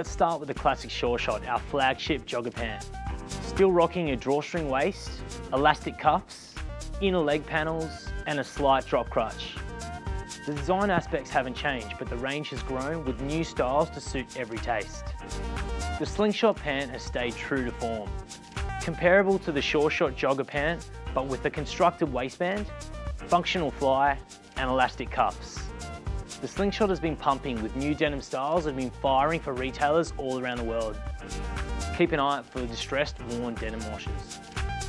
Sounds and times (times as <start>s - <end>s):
Speech: 0.0s - 2.8s, 3.5s - 9.6s, 10.5s - 15.1s, 16.0s - 18.1s, 18.8s - 22.7s, 23.3s - 25.7s, 26.4s - 31.0s, 32.0s - 34.3s
Music: 0.0s - 34.8s.